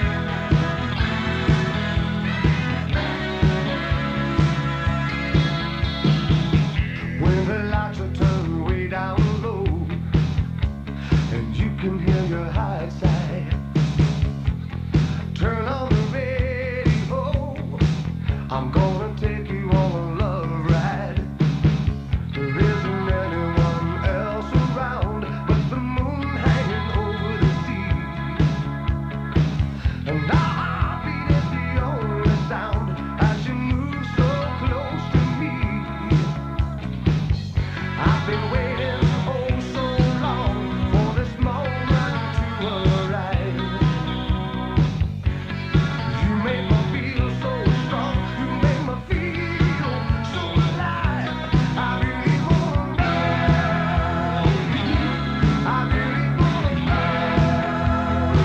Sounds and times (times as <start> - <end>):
Music: 0.0 - 58.4.